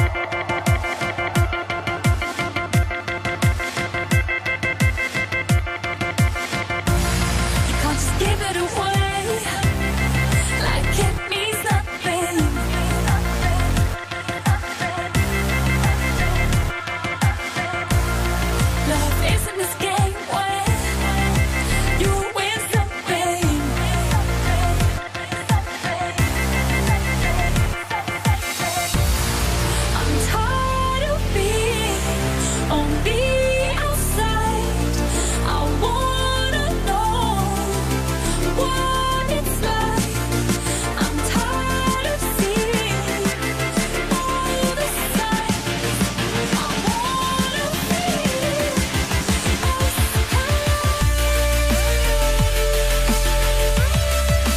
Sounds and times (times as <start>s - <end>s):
Music: 0.0s - 54.5s.